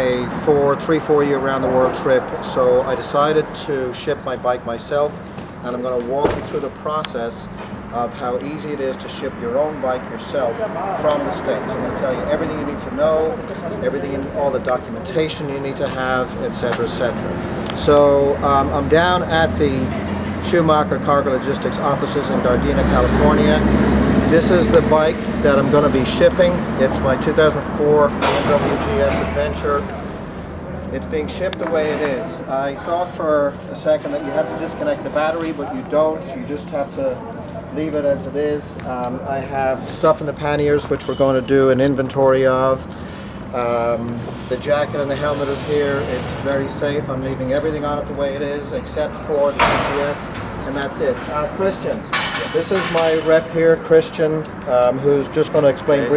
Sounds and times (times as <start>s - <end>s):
Speech: 0.0s - 29.9s, 30.9s - 42.9s, 43.5s - 56.1s.